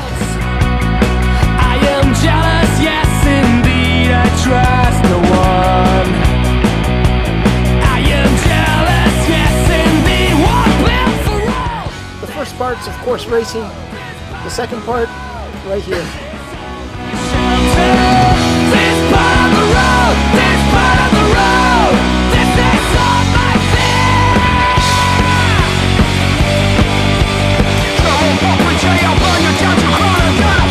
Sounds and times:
Punk rock: 0.0 - 30.7
Speech: 12.2 - 13.8, 14.4 - 16.3.

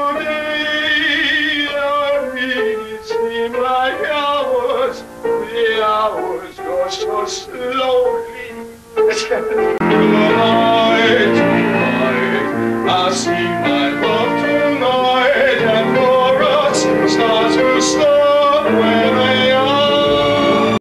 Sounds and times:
Male singing: 0.0 - 20.8
Music: 0.0 - 20.8.

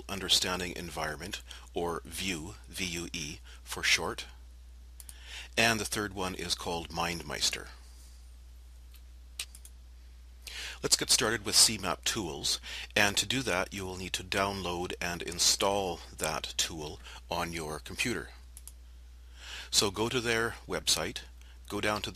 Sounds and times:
Speech: 0.0 - 4.4, 5.5 - 7.8, 10.8 - 18.4, 19.7 - 22.1.

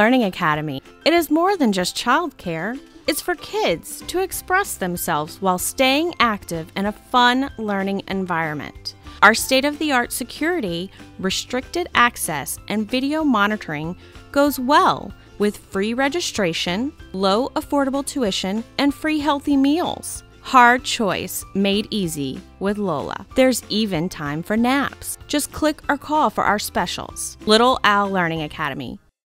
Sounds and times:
Speech: 0.0 - 29.0
Music: 0.0 - 29.2.

